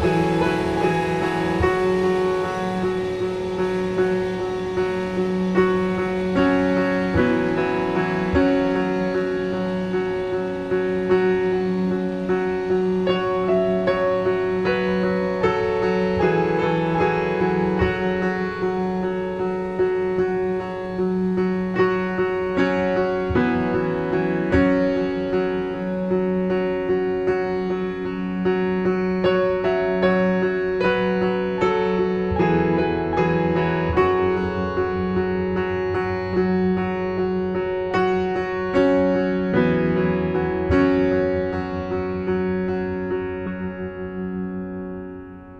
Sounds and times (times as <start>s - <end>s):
Electric piano: 0.0s - 45.6s.